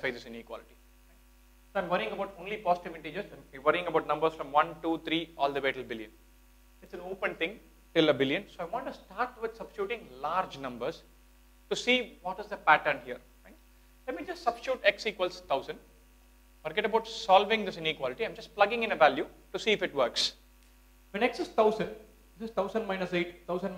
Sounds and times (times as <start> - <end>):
Speech: 0.0 - 0.8, 1.8 - 6.2, 6.8 - 11.1, 11.7 - 15.8, 16.7 - 20.4, 21.1 - 23.7.